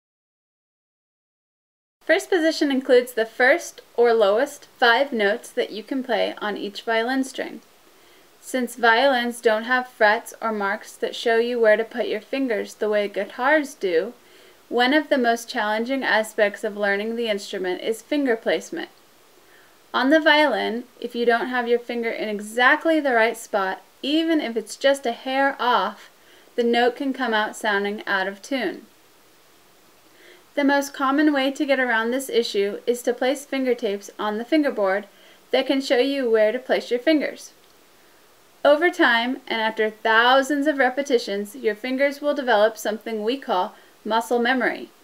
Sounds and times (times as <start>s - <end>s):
Speech: 2.0s - 7.6s, 8.4s - 19.0s, 20.0s - 28.9s, 30.6s - 37.6s, 38.6s - 45.0s.